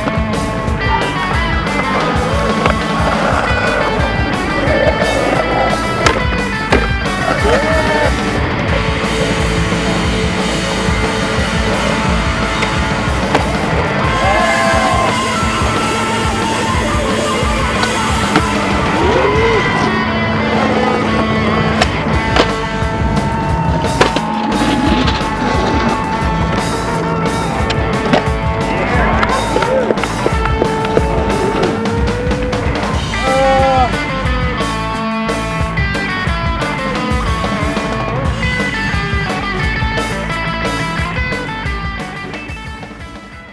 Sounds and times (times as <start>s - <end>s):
Skateboard: 0.0s - 33.8s
Music: 0.0s - 43.5s.